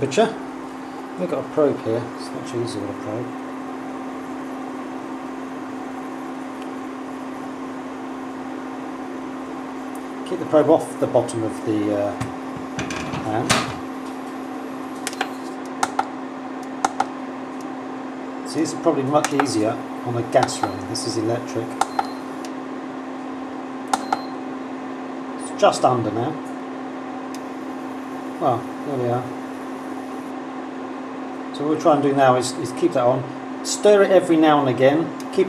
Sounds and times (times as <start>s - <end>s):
Speech: 0.0s - 0.4s, 1.2s - 3.4s, 10.2s - 12.3s, 13.2s - 13.7s, 18.5s - 21.8s, 25.4s - 26.5s, 28.4s - 29.4s, 31.5s - 35.4s.